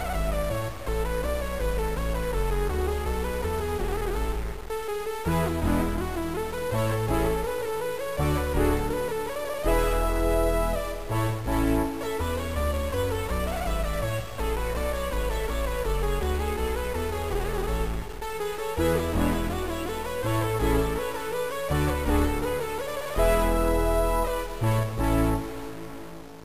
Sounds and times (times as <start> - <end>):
Music: 0.0 - 26.4.